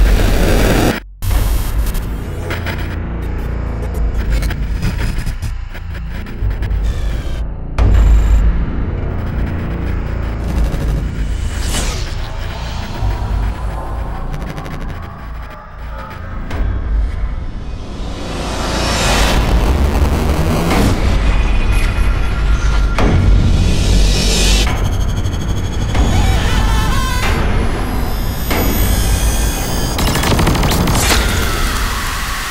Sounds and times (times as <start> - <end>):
Sound effect: 0.0 - 32.5
Music: 0.7 - 32.5.